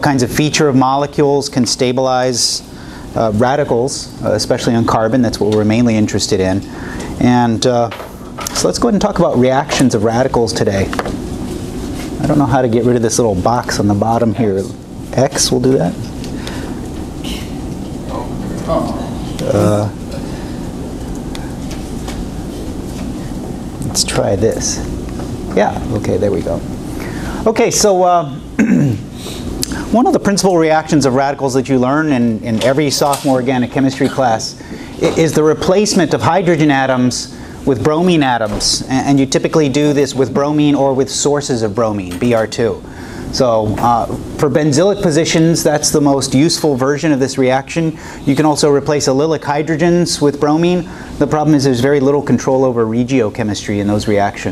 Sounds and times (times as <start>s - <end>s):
Speech: 0.0s - 11.0s, 12.2s - 16.1s, 18.1s - 20.0s, 23.8s - 24.9s, 25.5s - 26.7s, 27.4s - 28.4s, 29.9s - 54.5s.